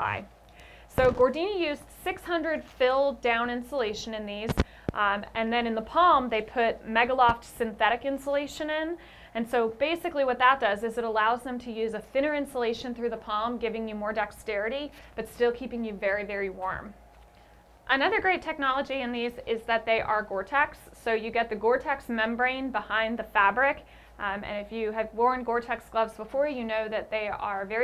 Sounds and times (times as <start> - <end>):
Speech: 0.0 - 0.3, 0.9 - 16.9, 17.9 - 27.8.